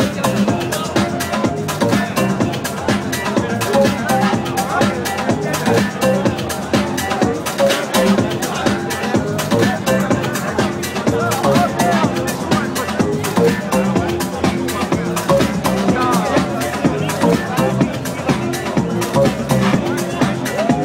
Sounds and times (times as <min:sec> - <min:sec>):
Music: 0:00.0 - 0:20.8.